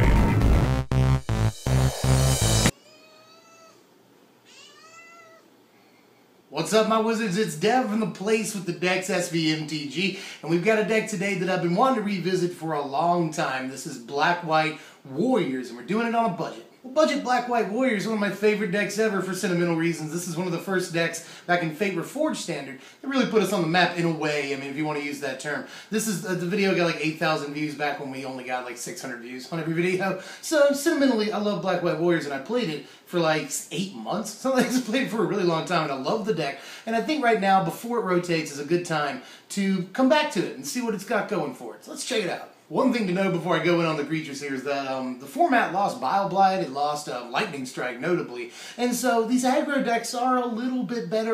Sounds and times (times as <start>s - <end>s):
Inside, small room: 0.0s - 51.3s
Caterwaul: 2.7s - 3.8s, 4.5s - 5.5s
Meow: 2.7s - 3.8s, 4.4s - 5.5s
Speech: 6.5s - 51.3s.